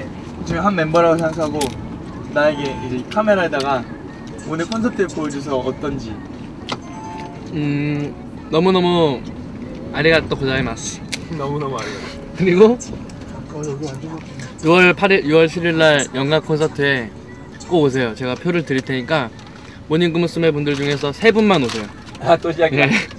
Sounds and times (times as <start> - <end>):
Music: 2.0 - 11.4, 14.2 - 23.1.